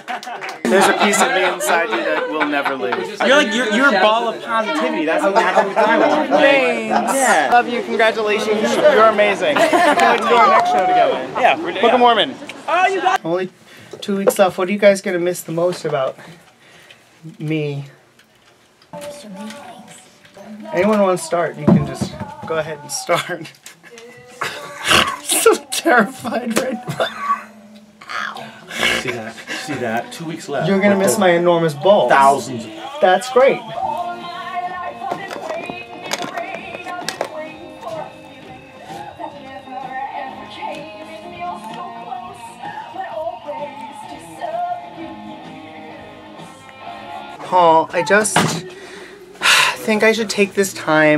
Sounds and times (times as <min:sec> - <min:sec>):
Music: 0:19.0 - 0:28.6, 0:29.6 - 0:51.1.